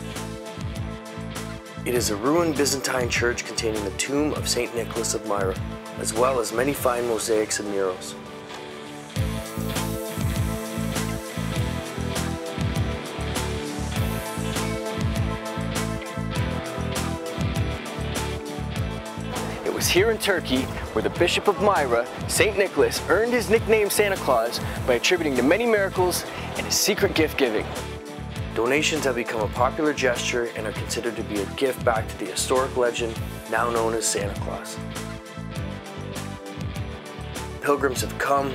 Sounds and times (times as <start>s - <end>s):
Music: 0.0s - 38.5s
Speech: 1.9s - 8.2s, 19.6s - 27.8s, 28.6s - 34.8s, 37.6s - 38.5s.